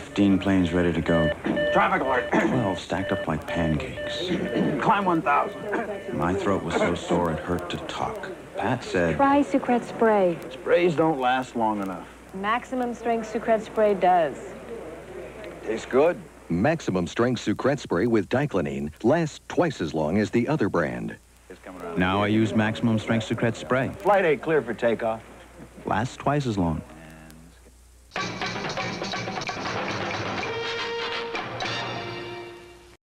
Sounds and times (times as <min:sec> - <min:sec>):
Speech: 0:00.0 - 0:27.6
Music: 0:28.1 - 0:33.0.